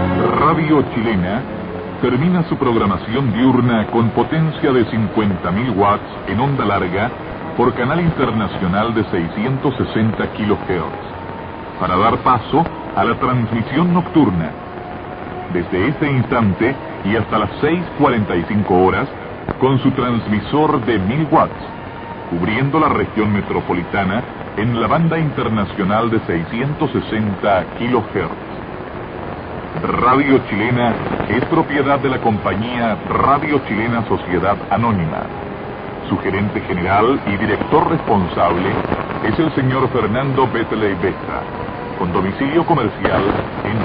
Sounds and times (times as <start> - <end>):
Speech: 0.0 - 11.2, 11.8 - 14.6, 15.5 - 21.7, 22.3 - 28.4, 29.8 - 35.4, 36.0 - 43.8
Radio: 0.0 - 43.8.